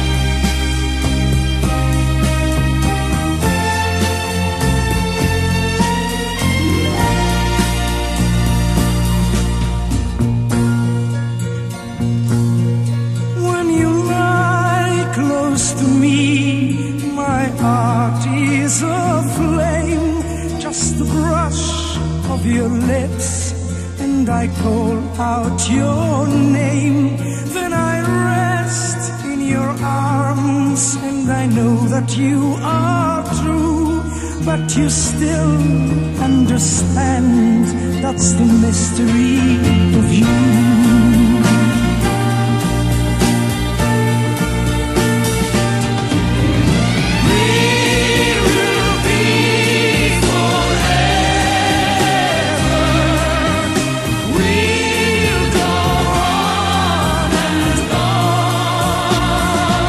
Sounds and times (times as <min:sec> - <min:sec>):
Music: 0:00.0 - 0:59.8.